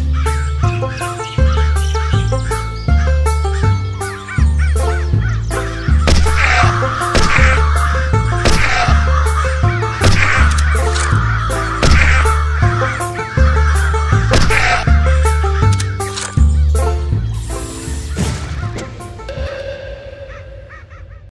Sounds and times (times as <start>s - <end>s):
Music: 0.0s - 21.3s
Caw: 6.2s - 15.6s, 19.4s - 21.3s.